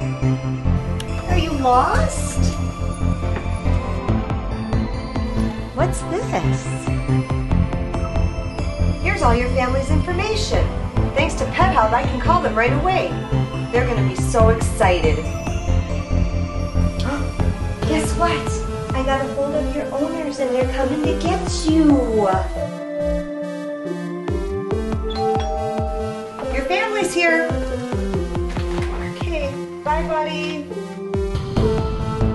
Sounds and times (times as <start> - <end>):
Music: 0.0 - 32.3.